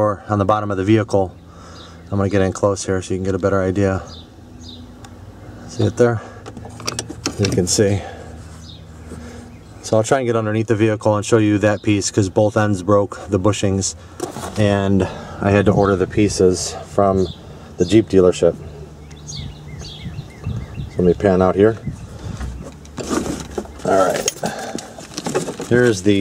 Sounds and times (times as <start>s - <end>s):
Speech: 0.0s - 1.4s, 2.1s - 4.1s, 5.7s - 6.3s, 7.4s - 8.1s, 9.8s - 18.7s, 21.0s - 21.8s, 23.8s - 24.3s, 25.6s - 26.2s
Outside, rural or natural: 0.0s - 26.2s.